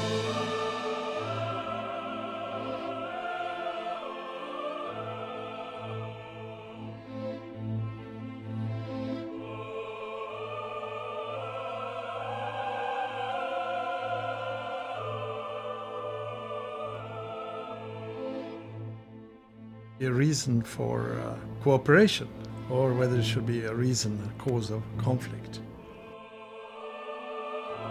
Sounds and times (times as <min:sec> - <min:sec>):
Music: 0:00.0 - 0:27.9.